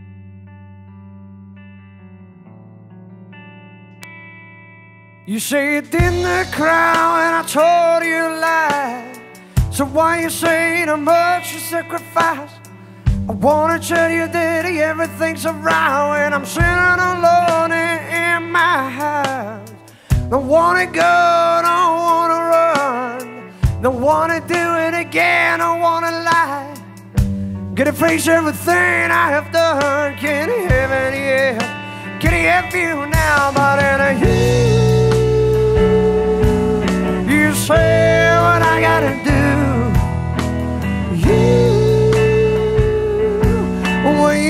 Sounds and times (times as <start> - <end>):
Music: 0.0 - 44.4.